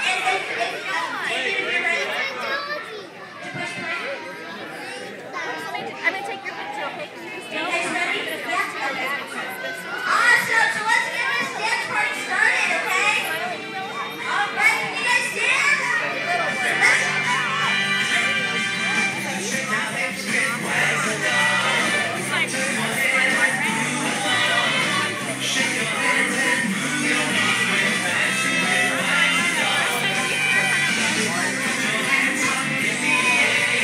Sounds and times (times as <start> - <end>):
Speech: 0.0 - 33.8
Music: 10.7 - 33.8.